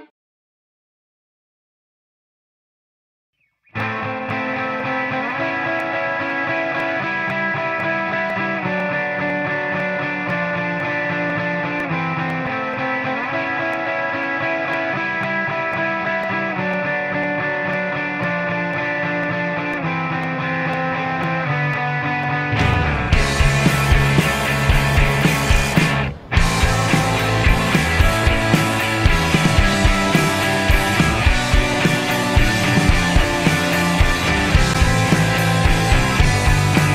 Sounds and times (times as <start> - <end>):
Grunge: 3.8 - 36.9.